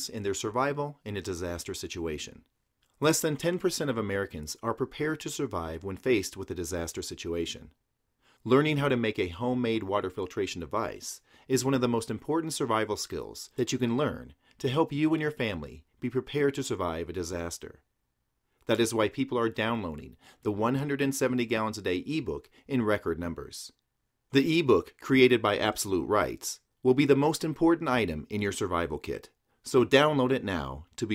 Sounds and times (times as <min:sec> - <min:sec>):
Speech: 0:00.0 - 0:07.8, 0:08.4 - 0:17.8, 0:18.6 - 0:31.1.